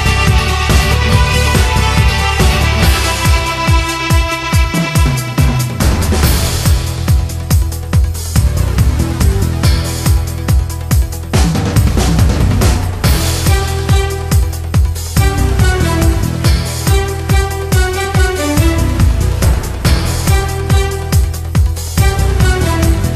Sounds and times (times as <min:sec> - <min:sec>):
Soundtrack music: 0:00.0 - 0:23.1
Video game music: 0:00.0 - 0:23.1.